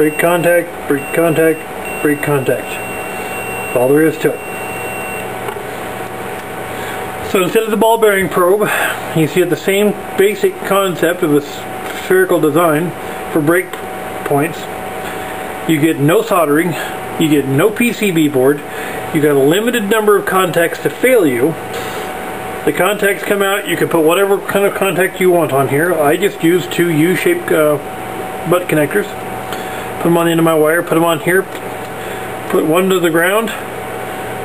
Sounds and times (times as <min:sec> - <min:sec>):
Mechanical fan: 0:00.0 - 0:34.4.